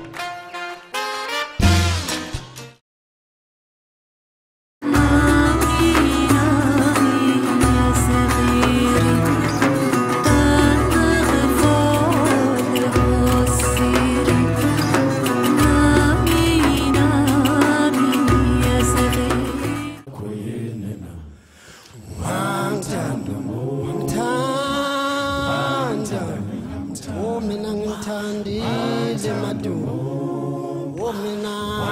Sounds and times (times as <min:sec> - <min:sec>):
Music: 0:00.0 - 0:02.8, 0:04.8 - 0:20.1.